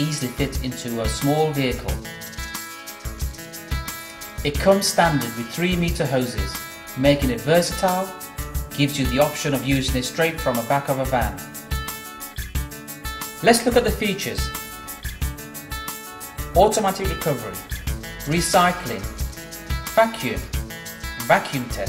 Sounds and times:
Speech: 0.0s - 2.0s, 4.4s - 8.2s, 8.8s - 11.5s, 13.4s - 14.6s, 16.6s - 17.7s, 18.3s - 19.2s, 20.0s - 20.5s, 21.2s - 21.8s
Music: 0.0s - 21.8s.

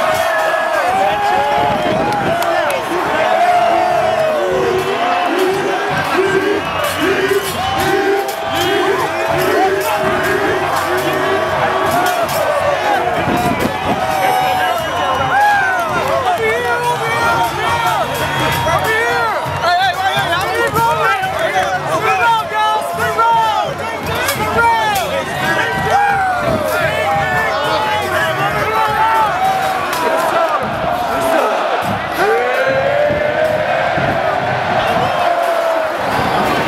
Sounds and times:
Speech: 0.0s - 32.9s.

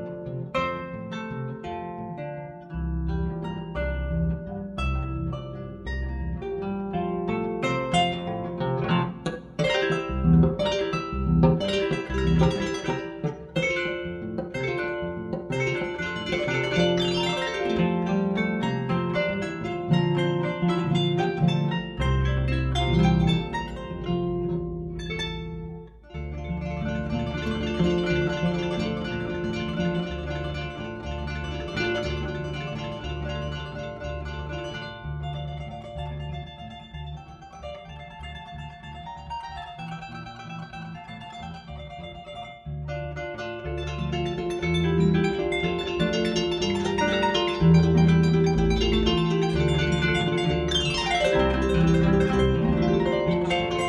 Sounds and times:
Harp: 0.0s - 53.8s
Plucked string instrument: 0.0s - 53.8s.

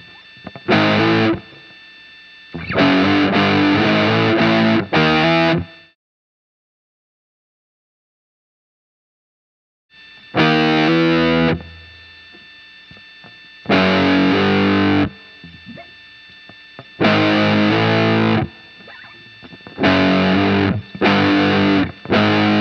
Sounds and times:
Electric guitar: 0.0s - 1.8s, 2.6s - 5.9s, 10.2s - 22.6s.

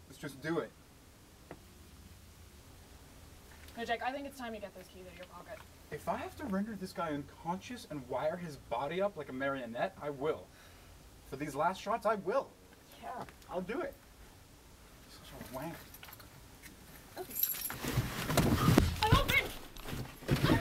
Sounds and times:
Outside, urban or manmade: 0.0s - 20.6s.

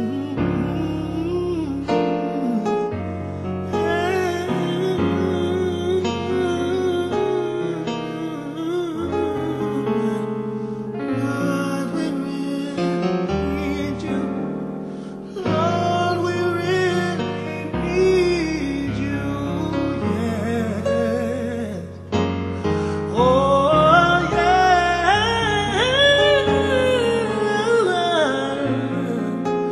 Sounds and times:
Gospel music: 0.0s - 29.7s
Soul music: 0.0s - 29.7s.

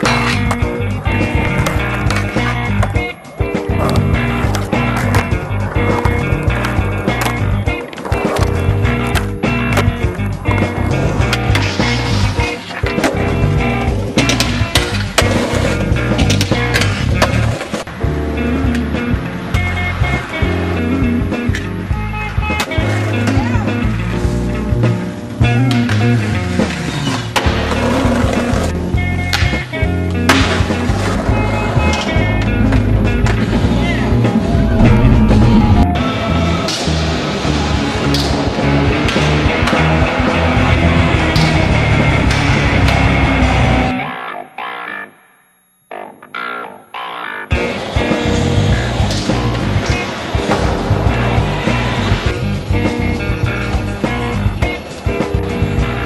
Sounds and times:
Skateboard: 0.0s - 44.3s, 47.5s - 56.0s
Music: 0.0s - 56.0s.

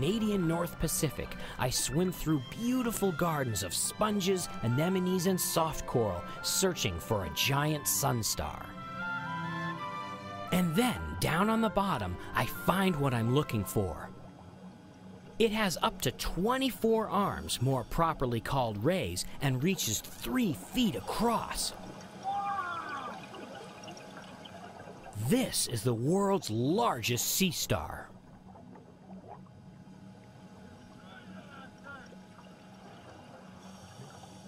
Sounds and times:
Speech: 0.0s - 8.7s, 10.5s - 14.1s, 15.4s - 21.8s, 25.2s - 28.1s, 31.0s - 32.1s
Music: 0.0s - 22.2s.

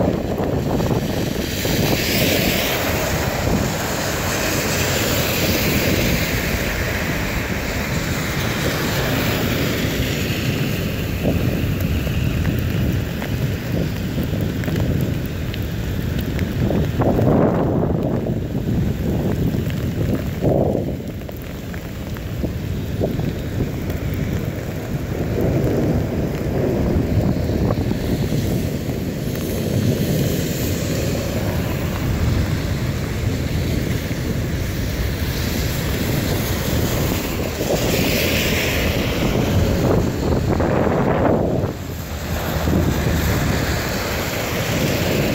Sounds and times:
Rain: 0.0s - 45.3s.

